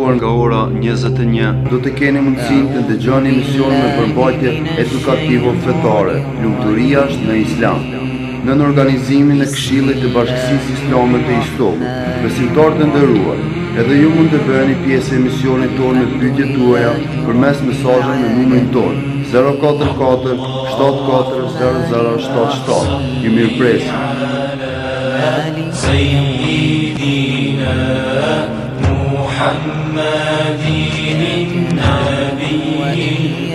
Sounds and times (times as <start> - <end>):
Speech: 0.0 - 24.2, 31.5 - 33.5
Music: 0.0 - 33.5.